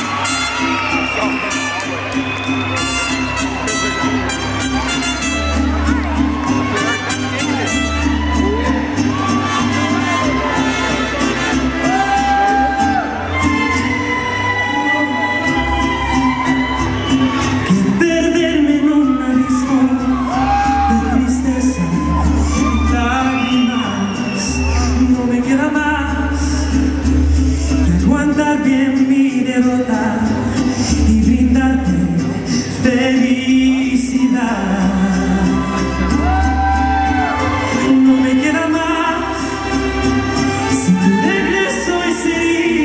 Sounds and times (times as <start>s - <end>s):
Music: 0.0s - 42.8s
Male singing: 17.7s - 39.8s, 40.6s - 42.8s.